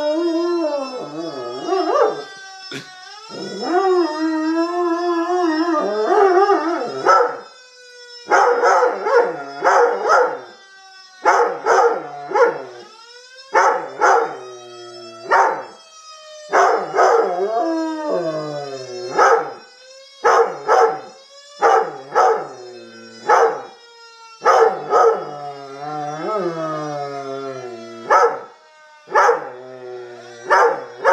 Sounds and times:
Siren: 0.0 - 31.1.

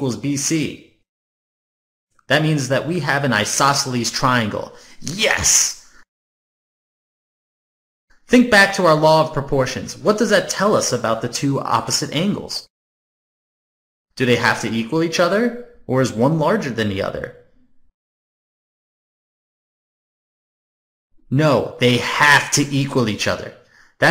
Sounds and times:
Speech: 0.0 - 1.0, 2.3 - 5.9, 8.3 - 12.7, 14.2 - 17.4, 21.3 - 24.1.

